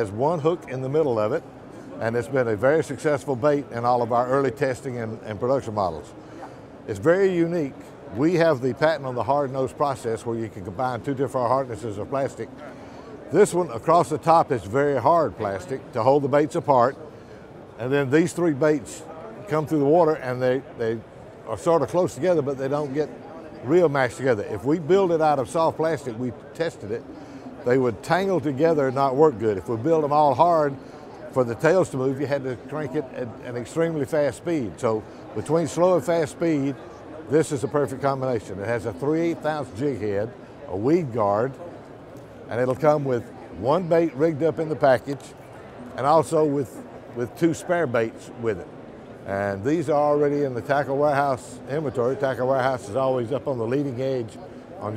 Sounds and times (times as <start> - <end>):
Speech: 0.0 - 6.2, 6.8 - 17.1, 17.8 - 41.8, 42.4 - 54.9.